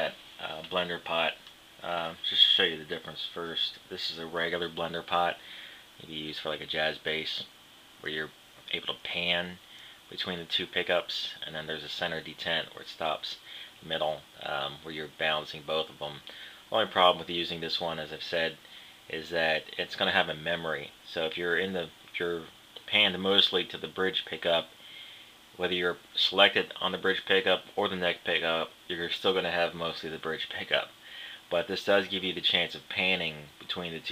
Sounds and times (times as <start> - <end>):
Speech: 0.0 - 5.4, 6.0 - 24.8, 25.6 - 34.1.